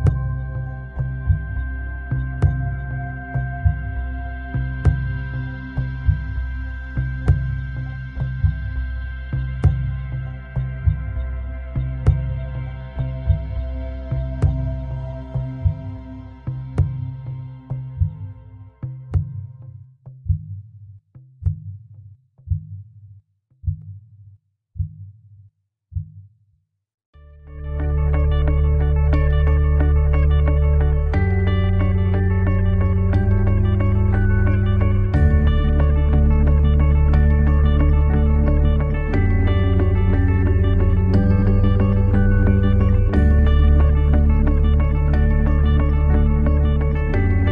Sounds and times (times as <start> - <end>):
Music: 0.0 - 24.2, 27.2 - 47.5.